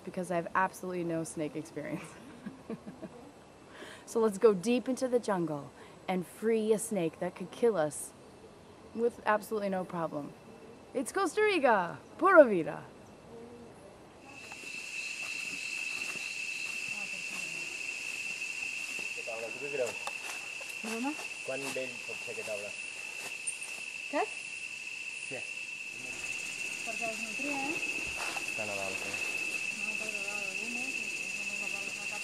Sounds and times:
Outside, rural or natural: 0.0 - 32.2.

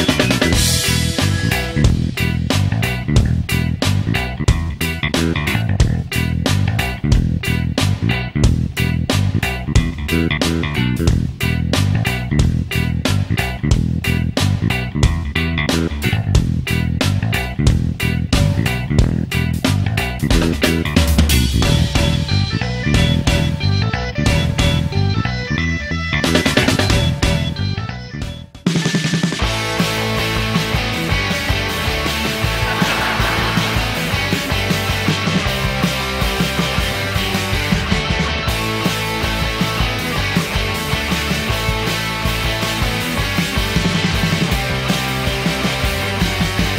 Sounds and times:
Music: 0.0 - 46.7.

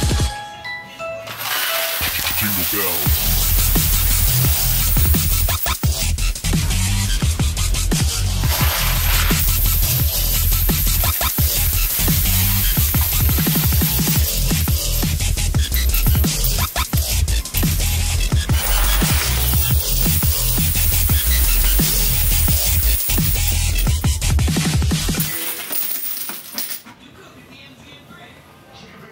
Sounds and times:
Music: 0.0 - 26.1.

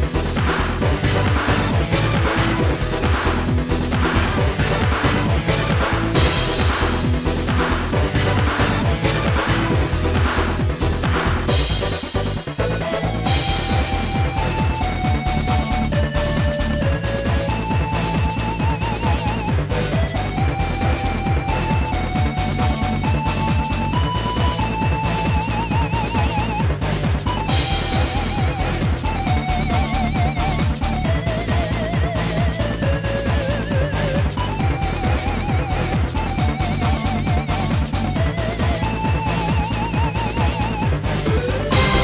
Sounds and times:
Music: 0.0 - 42.0.

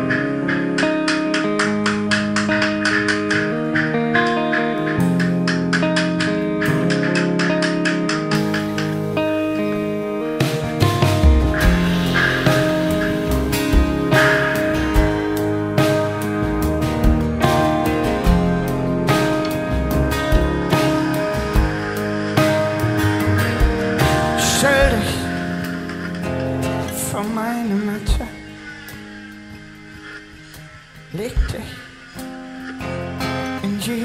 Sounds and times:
Music: 0.0 - 34.0.

